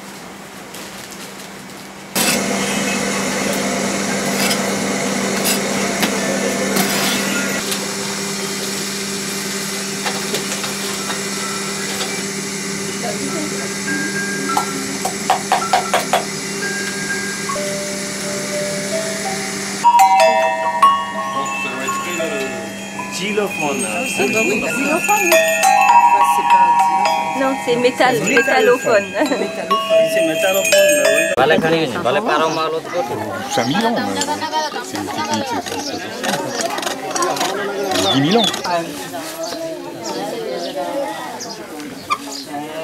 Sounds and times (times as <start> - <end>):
Glockenspiel: 13.3 - 31.4
Marimba, xylophone: 13.3 - 31.5.